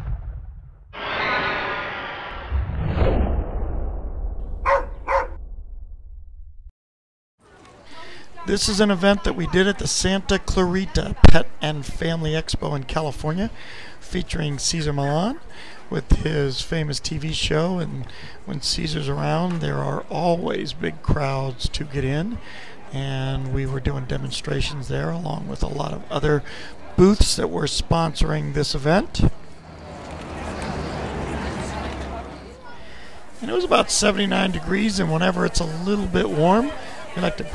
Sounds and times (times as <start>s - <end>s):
Speech: 7.5s - 29.4s, 30.9s - 37.5s.